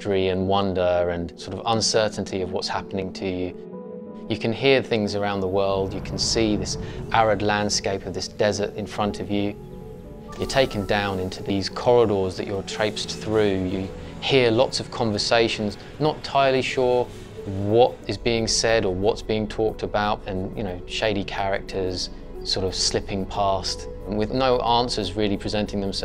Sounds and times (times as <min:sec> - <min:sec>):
Speech: 0:00.0 - 0:03.6, 0:04.3 - 0:09.6, 0:10.4 - 0:26.0.